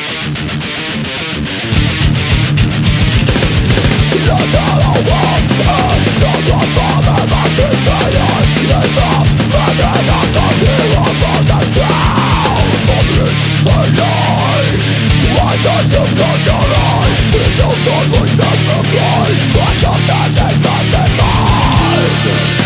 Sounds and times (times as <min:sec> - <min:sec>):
Music: 0:00.0 - 0:22.6.